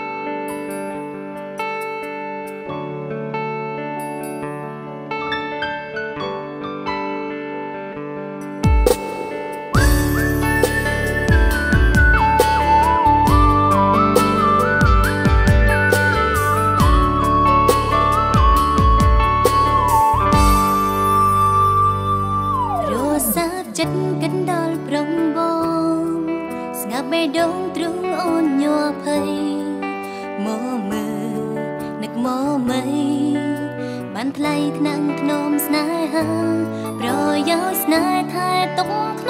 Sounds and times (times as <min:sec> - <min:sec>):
Music: 0:00.0 - 0:39.3.